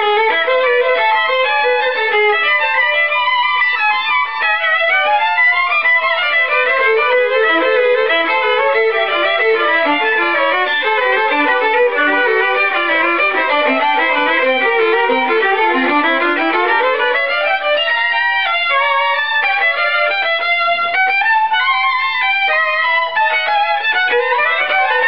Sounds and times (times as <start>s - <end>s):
Violin, fiddle: 0.0s - 25.0s.